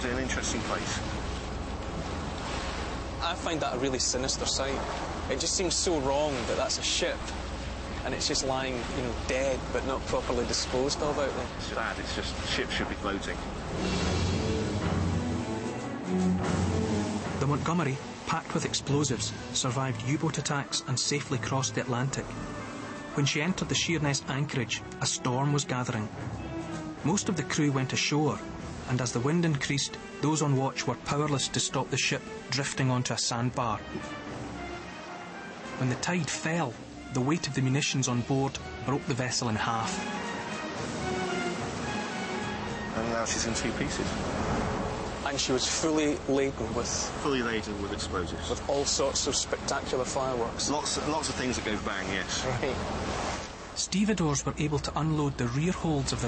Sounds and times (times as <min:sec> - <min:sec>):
Speech: 0:00.0 - 0:01.0, 0:03.2 - 0:07.3, 0:08.0 - 0:13.4, 0:17.4 - 0:22.3, 0:23.2 - 0:26.1, 0:27.0 - 0:33.9, 0:35.8 - 0:40.0, 0:43.0 - 0:44.1, 0:45.3 - 0:52.8, 0:53.8 - 0:56.2
Music: 0:03.2 - 0:52.8, 0:53.9 - 0:56.2.